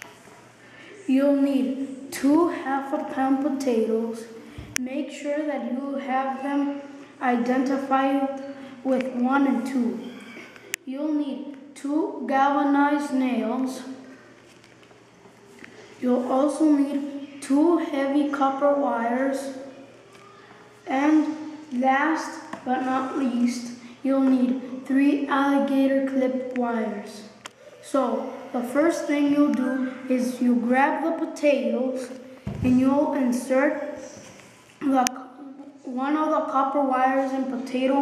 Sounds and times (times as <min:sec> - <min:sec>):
Speech: 0:00.9 - 0:14.1, 0:16.0 - 0:38.0.